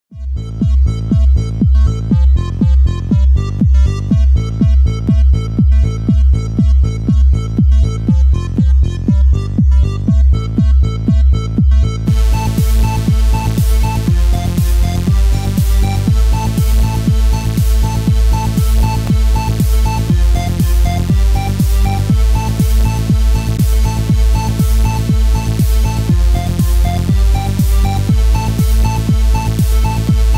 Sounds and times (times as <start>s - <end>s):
Electronica: 0.2s - 30.3s.